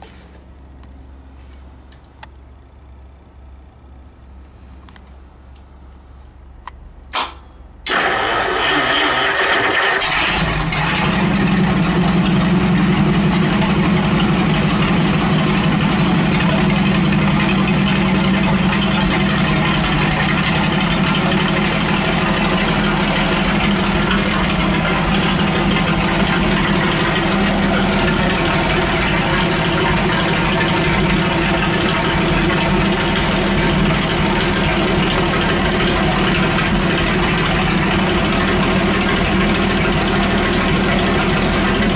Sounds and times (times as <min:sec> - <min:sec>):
Idling: 0:07.8 - 0:41.9.